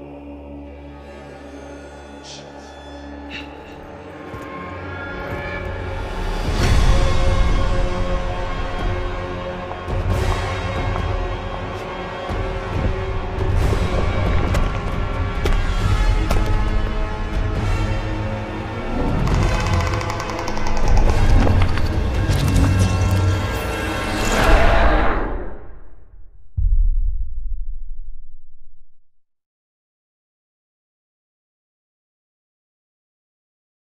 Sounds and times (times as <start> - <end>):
Silence: 25.1 - 29.3.